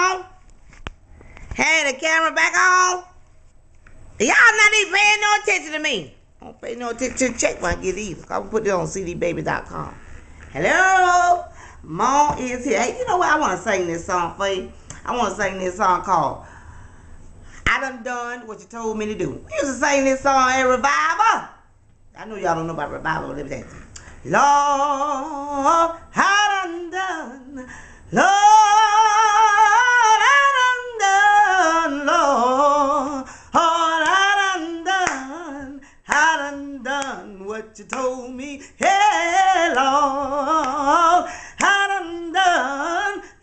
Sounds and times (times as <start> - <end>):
Female singing: 10.5 - 16.4, 22.2 - 43.4.